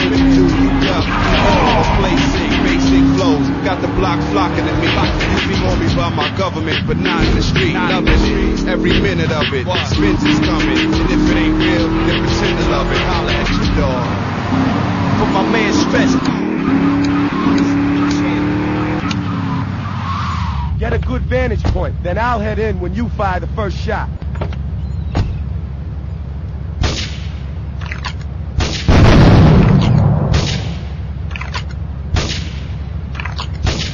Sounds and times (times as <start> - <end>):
Music: 0.0 - 14.0
Speech: 15.2 - 16.2, 17.7 - 19.1, 20.8 - 24.1.